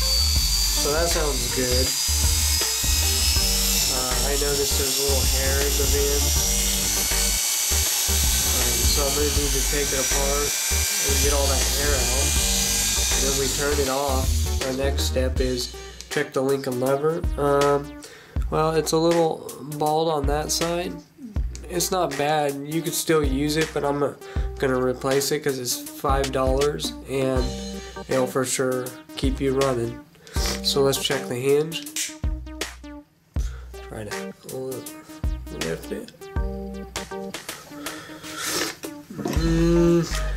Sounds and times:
Electric shaver, electric razor: 0:00.0 - 0:15.0
Inside, small room: 0:00.0 - 0:40.3
Music: 0:00.0 - 0:40.3
Speech: 0:00.8 - 0:01.9, 0:03.9 - 0:06.3, 0:08.5 - 0:12.3, 0:13.2 - 0:17.9, 0:18.5 - 0:32.0, 0:33.9 - 0:34.9, 0:35.5 - 0:36.1, 0:39.1 - 0:40.3.

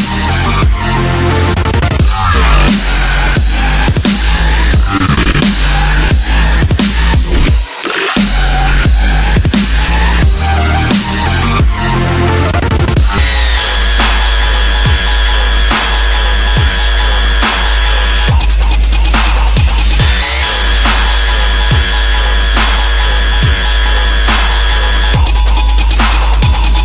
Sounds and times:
Dubstep: 0:00.0 - 0:26.8.

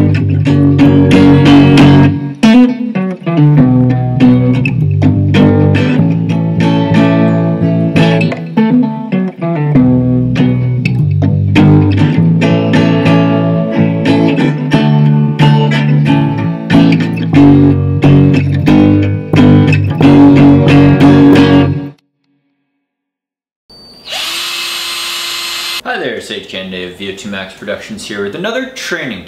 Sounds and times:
Bass guitar: 0:00.0 - 0:22.0.

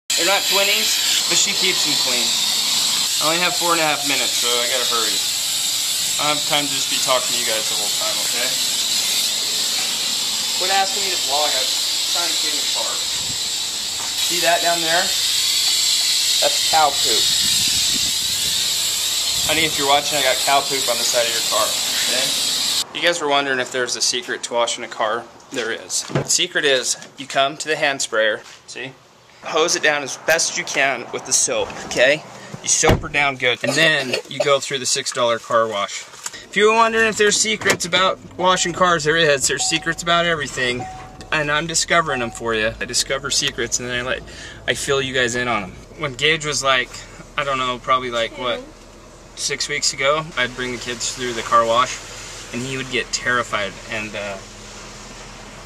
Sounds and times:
Spray: 0:00.1 - 0:22.8, 0:50.2 - 0:55.6
Speech: 0:00.2 - 0:02.4, 0:03.2 - 0:05.2, 0:06.2 - 0:08.6, 0:10.6 - 0:13.0, 0:14.3 - 0:15.2, 0:16.4 - 0:17.3, 0:19.5 - 0:48.7, 0:49.4 - 0:52.0, 0:52.6 - 0:54.4.

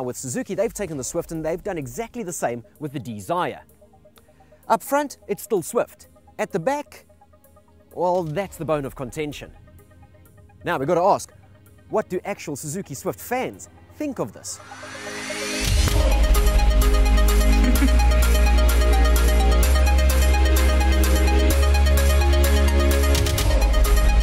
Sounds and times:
Speech: 0:00.0 - 0:03.6, 0:04.7 - 0:07.0, 0:08.0 - 0:09.5, 0:10.6 - 0:11.3, 0:11.9 - 0:14.6
Music: 0:00.0 - 0:24.2.

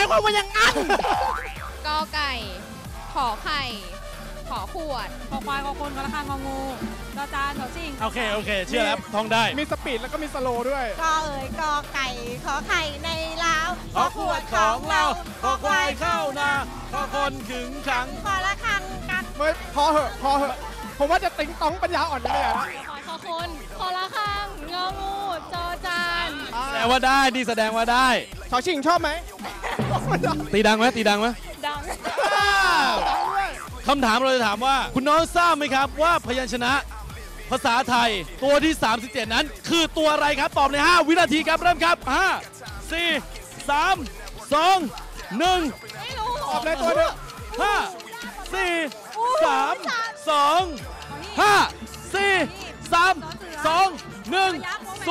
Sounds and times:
Music: 0:00.0 - 0:55.1.

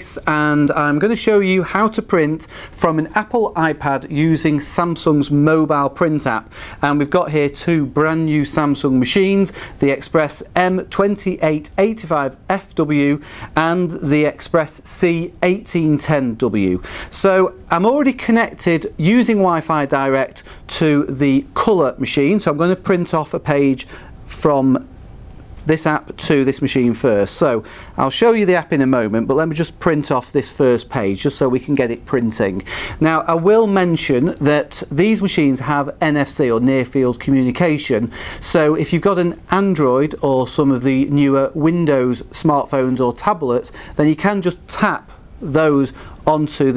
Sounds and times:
Speech: 0:00.0 - 0:24.9, 0:25.6 - 0:46.7.

